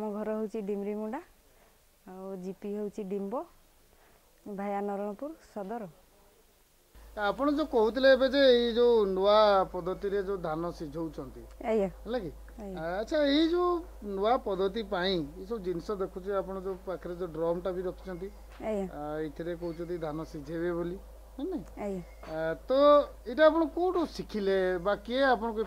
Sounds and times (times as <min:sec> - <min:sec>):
Speech: 0:07.2 - 0:25.6.